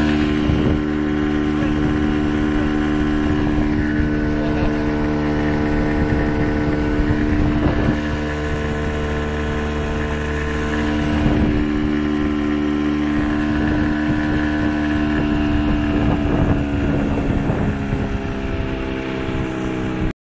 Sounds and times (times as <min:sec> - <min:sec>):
Motorboat, speedboat: 0:00.0 - 0:20.2.